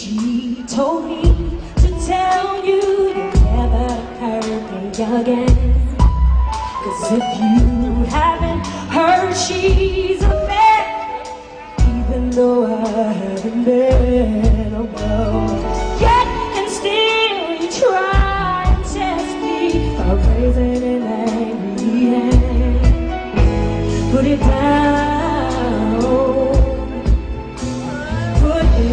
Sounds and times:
Female singing: 0.0 - 6.2, 6.8 - 23.1, 24.0 - 27.2, 27.8 - 28.9
Music: 0.0 - 28.9.

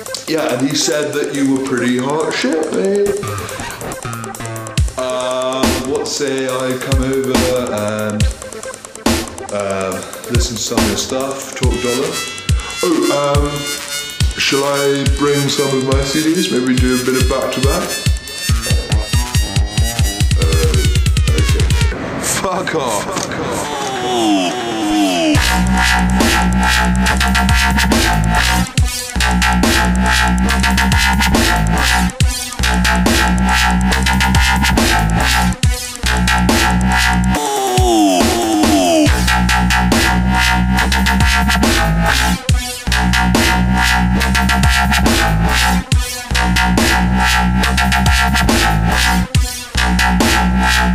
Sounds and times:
Dubstep: 0.0 - 50.9
Speech: 0.3 - 3.2, 5.0 - 8.3, 9.5 - 12.2, 12.8 - 13.7, 14.4 - 18.0, 20.4 - 25.3.

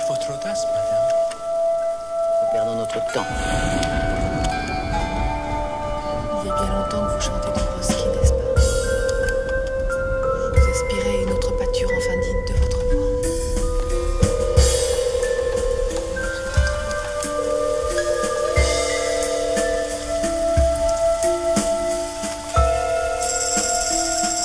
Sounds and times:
Speech: 0.0 - 1.2, 2.5 - 3.4, 6.4 - 8.6, 10.4 - 12.8.

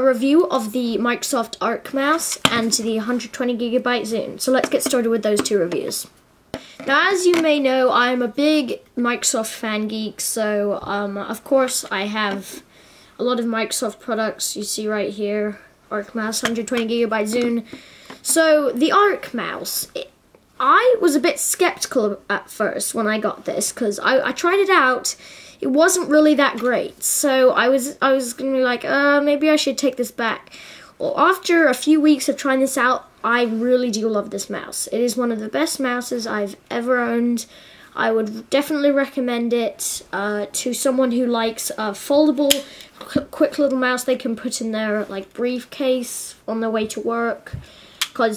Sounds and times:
Speech: 0.0 - 6.1, 6.8 - 12.6, 13.2 - 47.6, 48.2 - 48.3.

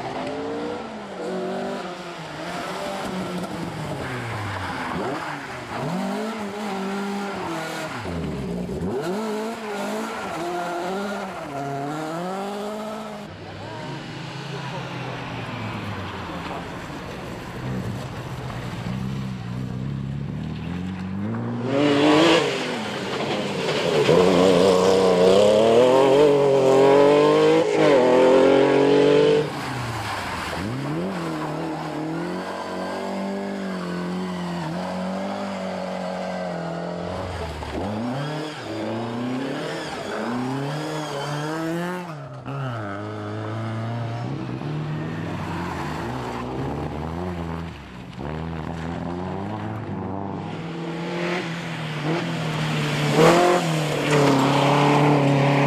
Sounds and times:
Race car, auto racing: 0.0 - 55.6
Car passing by: 43.0 - 55.6.

